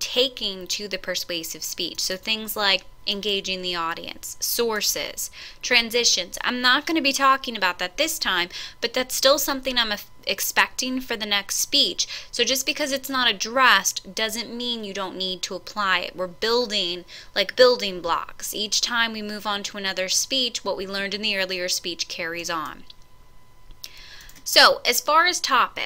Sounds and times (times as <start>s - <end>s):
Female speech, woman speaking: 0.0s - 22.9s, 24.5s - 25.8s
Narration, monologue: 0.0s - 25.8s.